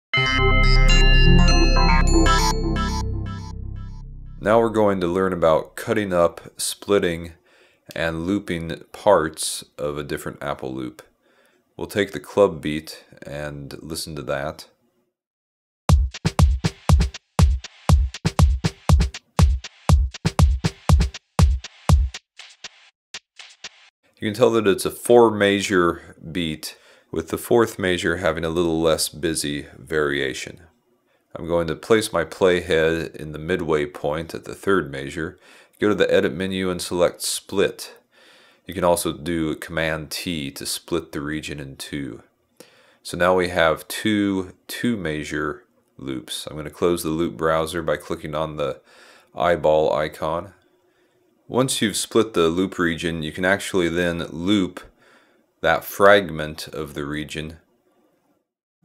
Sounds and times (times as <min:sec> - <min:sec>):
Synthesizer: 0:00.2 - 0:04.8.